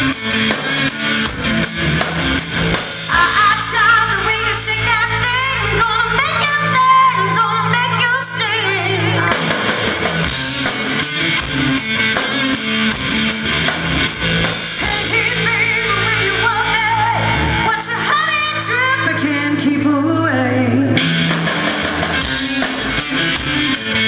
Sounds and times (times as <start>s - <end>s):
Music: 0.0s - 24.0s.